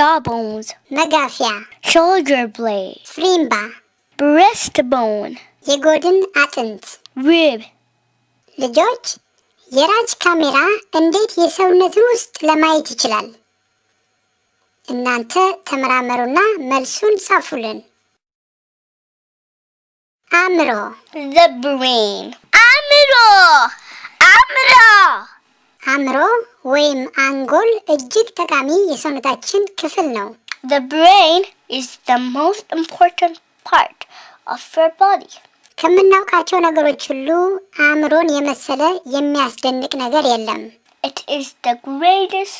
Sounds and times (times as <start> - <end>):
Child speech, kid speaking: 0.0 - 7.8, 8.5 - 13.4, 14.8 - 17.9, 20.3 - 42.5.